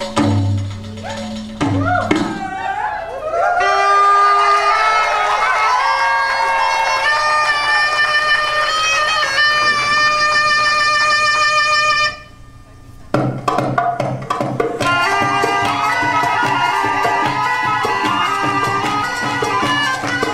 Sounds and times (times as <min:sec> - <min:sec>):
Music: 0:00.0 - 0:02.7, 0:03.5 - 0:20.3
Inside, public space: 0:00.0 - 0:20.3.